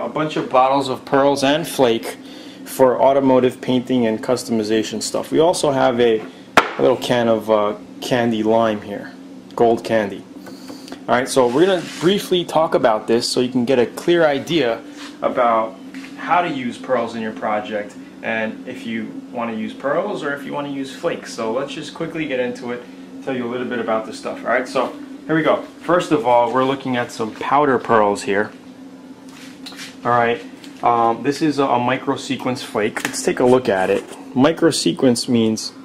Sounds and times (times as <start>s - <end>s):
Speech: 0.0s - 10.3s, 11.1s - 28.6s, 30.0s - 35.8s.